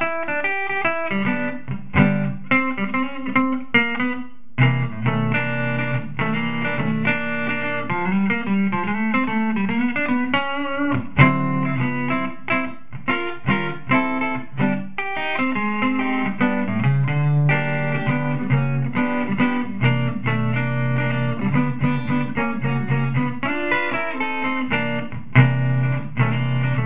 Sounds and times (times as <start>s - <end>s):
Music: 0.0s - 26.8s.